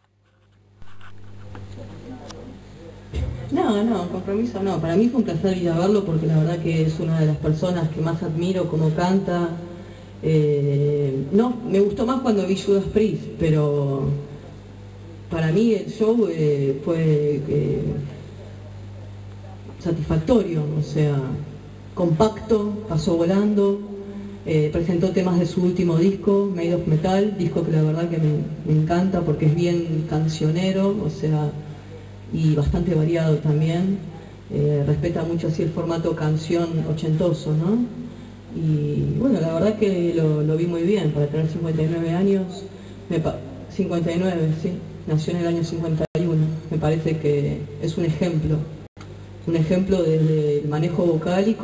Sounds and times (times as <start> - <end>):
Speech: 1.6 - 48.8, 49.4 - 51.6.